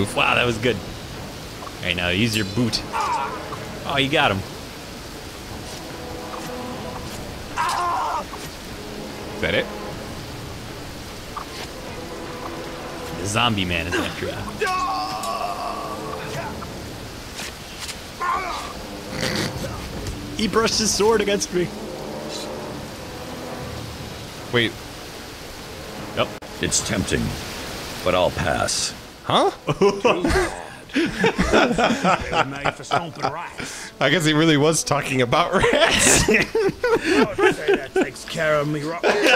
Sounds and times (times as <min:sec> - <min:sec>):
Pink noise: 0:00.0 - 0:39.3.